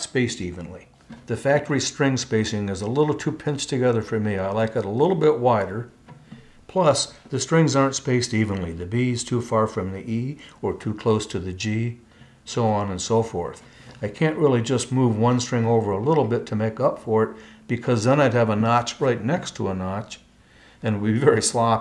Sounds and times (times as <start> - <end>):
Speech: 0.0 - 6.0, 6.7 - 21.8.